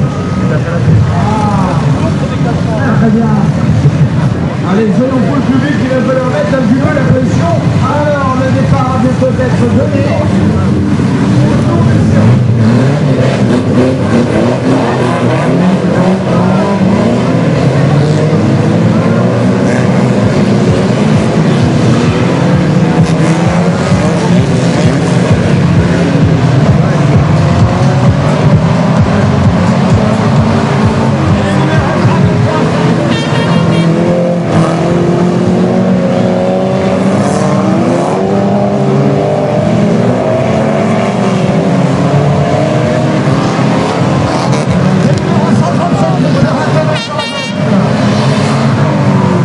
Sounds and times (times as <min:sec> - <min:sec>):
Speech: 0:04.6 - 0:10.7, 0:31.3 - 0:32.8, 0:45.0 - 0:47.5.